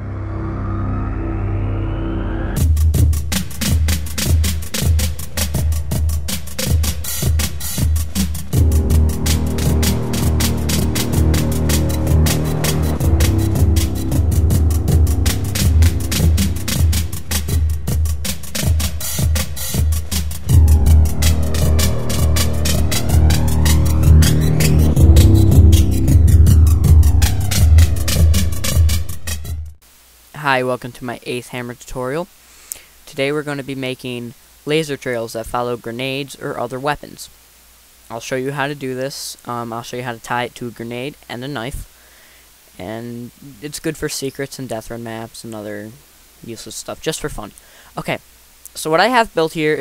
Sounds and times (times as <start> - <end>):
Music: 0.0 - 29.8.